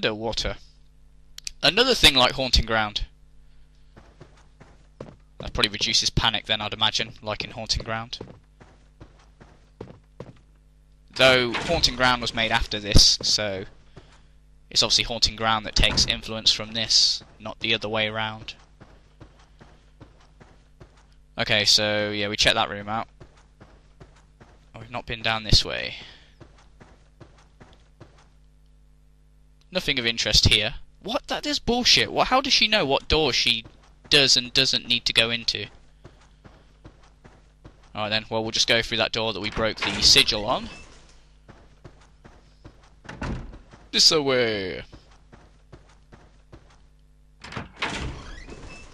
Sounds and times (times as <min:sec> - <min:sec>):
Speech: 0:00.0 - 0:00.6, 0:01.4 - 0:03.1, 0:05.4 - 0:08.2, 0:11.2 - 0:13.7, 0:14.7 - 0:18.6, 0:21.4 - 0:23.1, 0:24.8 - 0:26.2, 0:29.7 - 0:35.7, 0:37.9 - 0:40.8, 0:43.9 - 0:44.9.